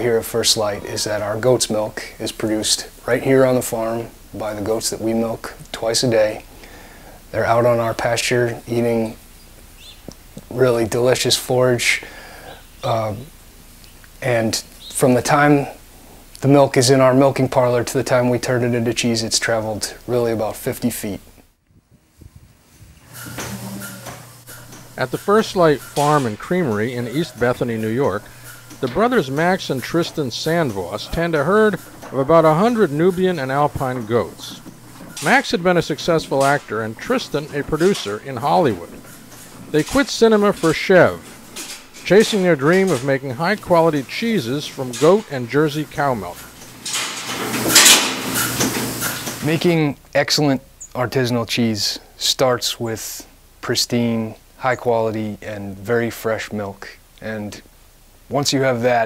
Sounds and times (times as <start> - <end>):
Speech: 0.0 - 6.5, 7.3 - 9.2, 10.4 - 12.1, 12.8 - 13.3, 14.2 - 15.8, 16.4 - 21.3, 25.0 - 34.6, 35.2 - 39.0, 39.7 - 41.3, 42.0 - 46.4, 49.4 - 57.7, 58.3 - 59.0.